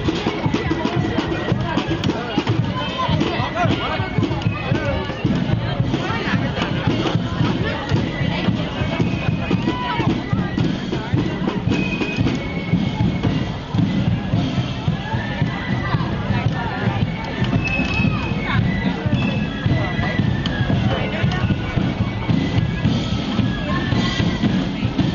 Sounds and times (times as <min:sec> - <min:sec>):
Music: 0:00.0 - 0:25.1
Speech: 0:00.0 - 0:25.1.